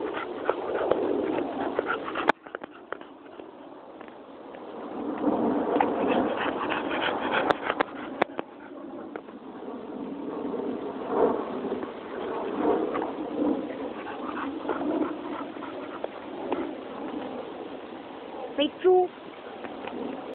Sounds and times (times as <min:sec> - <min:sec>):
Dog: 0:00.0 - 0:03.8, 0:05.7 - 0:09.3, 0:12.8 - 0:17.4
Speech: 0:18.6 - 0:19.2.